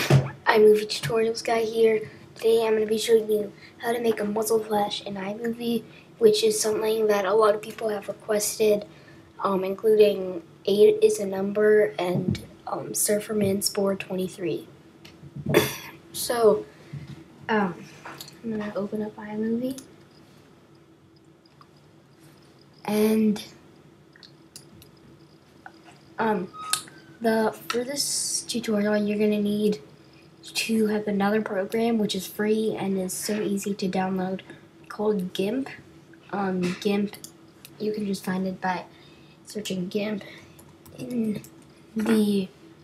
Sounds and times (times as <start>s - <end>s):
Speech: 0.0s - 14.7s, 16.2s - 16.7s, 17.5s - 19.9s, 22.9s - 23.6s, 26.2s - 26.6s, 27.2s - 38.9s, 39.5s - 41.4s, 42.0s - 42.6s.